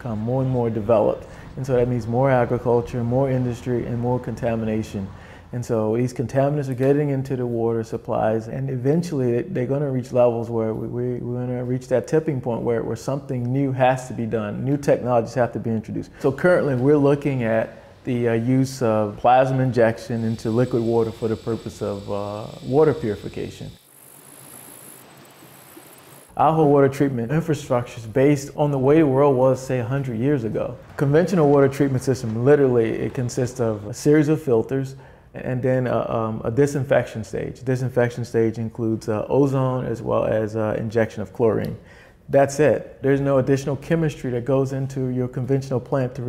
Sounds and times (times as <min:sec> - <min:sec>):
Speech: 0:00.0 - 0:23.8, 0:26.4 - 0:46.2.